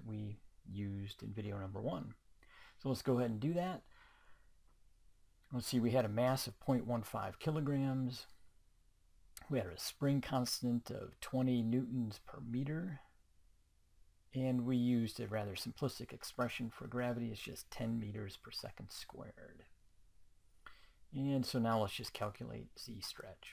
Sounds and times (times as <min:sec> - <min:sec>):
Speech: 0:00.0 - 0:02.2, 0:02.8 - 0:03.9, 0:05.5 - 0:08.4, 0:09.4 - 0:13.2, 0:14.4 - 0:19.7, 0:21.1 - 0:23.5.